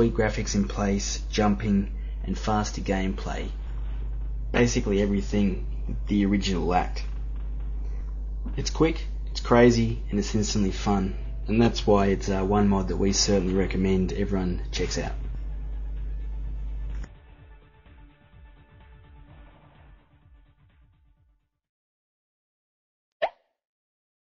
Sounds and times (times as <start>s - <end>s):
Speech: 0.0s - 3.6s, 4.5s - 7.1s, 8.5s - 15.3s.